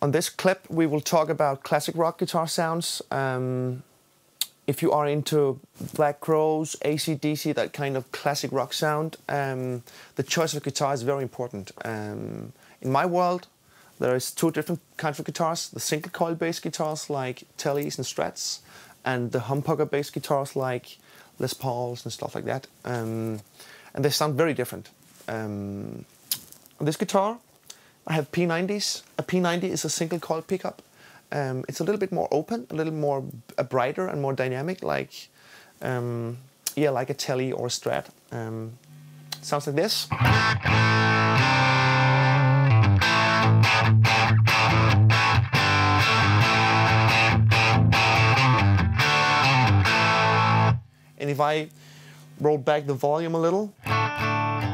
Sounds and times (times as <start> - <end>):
Speech: 0.0 - 26.1, 26.8 - 27.4, 28.1 - 38.8, 39.4 - 40.1, 51.2 - 51.8, 52.4 - 53.8.